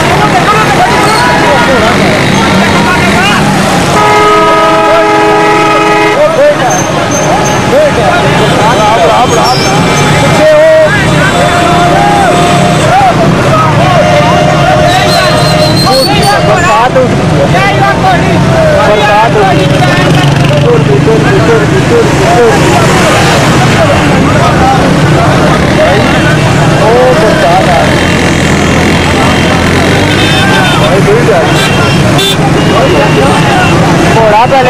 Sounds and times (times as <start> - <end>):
Speech: 0.0 - 3.7, 4.8 - 28.2, 28.8 - 34.6.